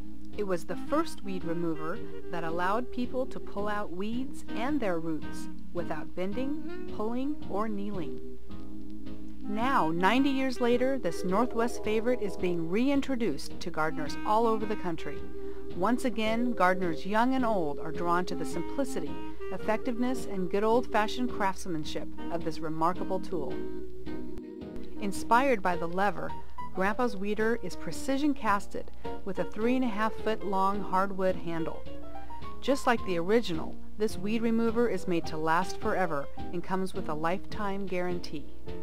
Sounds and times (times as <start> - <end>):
Music: 0.0 - 38.8
Speech: 0.4 - 8.1, 9.5 - 15.2, 15.8 - 23.6, 25.0 - 31.8, 32.6 - 38.5.